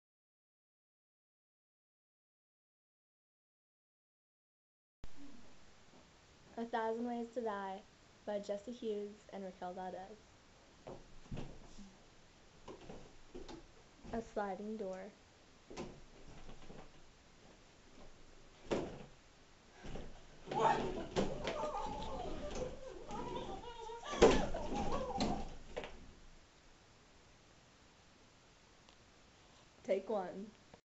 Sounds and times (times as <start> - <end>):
Speech: 6.6 - 10.2, 14.1 - 15.2, 20.6 - 21.0, 29.9 - 30.6.